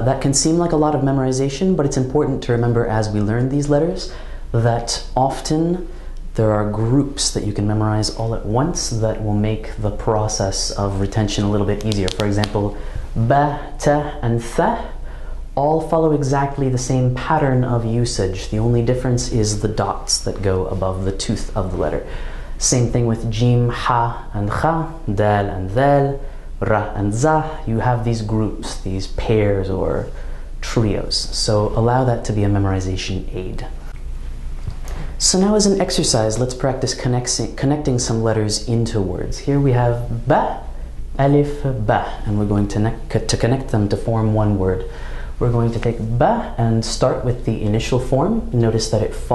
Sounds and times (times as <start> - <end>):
Speech: 0.0 - 15.0, 15.6 - 34.0, 34.9 - 49.3.